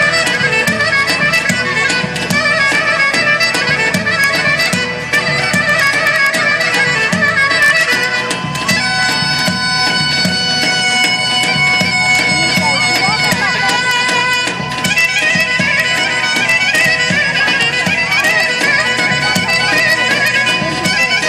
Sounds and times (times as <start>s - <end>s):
Bagpipes: 0.0s - 21.2s
Wind instrument, woodwind instrument: 0.0s - 21.2s.